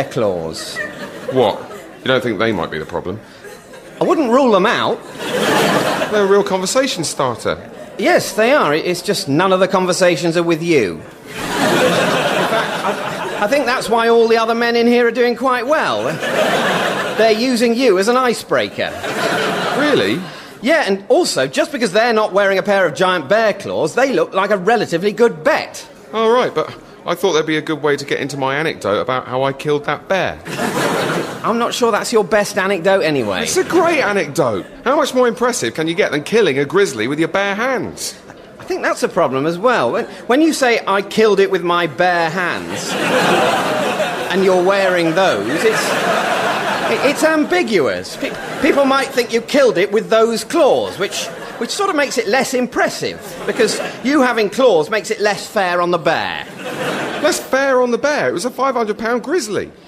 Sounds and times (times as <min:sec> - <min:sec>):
Speech: 0:00.0 - 0:03.2, 0:04.0 - 0:05.0, 0:05.7 - 0:11.1, 0:13.0 - 0:16.3, 0:17.0 - 0:30.5, 0:31.4 - 0:43.2, 0:44.2 - 0:46.2, 0:46.8 - 0:56.6, 0:57.2 - 0:59.8.